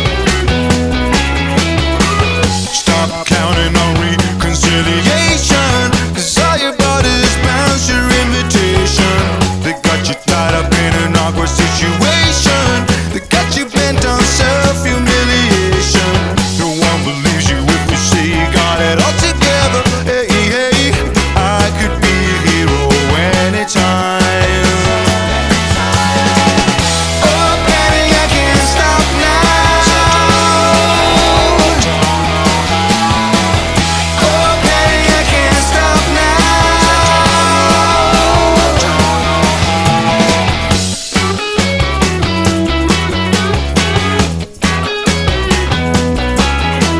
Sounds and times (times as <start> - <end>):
Pop music: 0.0 - 46.9.